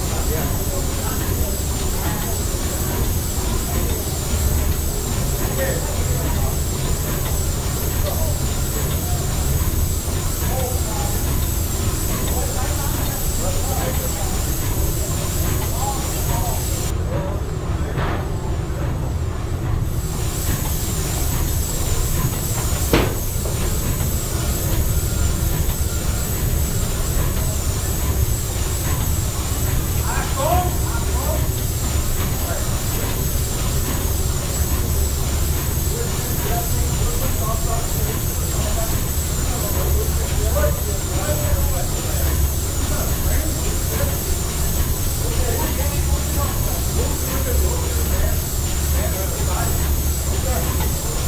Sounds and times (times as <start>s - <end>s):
Speech: 0.0s - 19.4s, 21.1s - 51.2s
Heavy engine (low frequency): 0.0s - 51.2s.